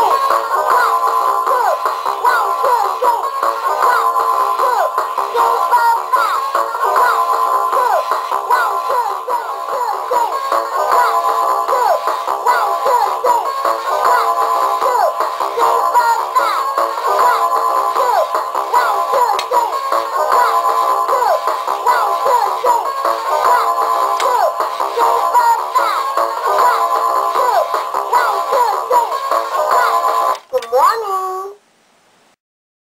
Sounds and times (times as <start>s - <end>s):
Speech: 30.5s - 31.6s.